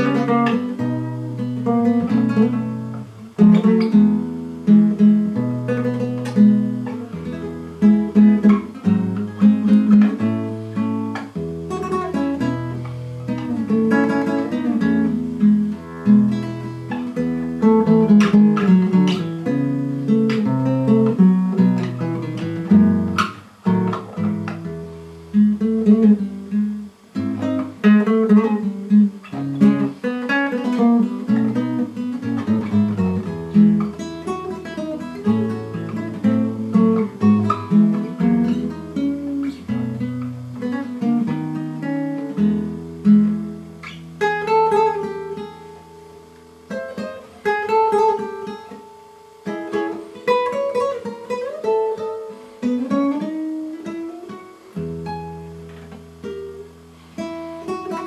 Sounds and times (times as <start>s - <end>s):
Acoustic guitar: 0.0s - 58.0s.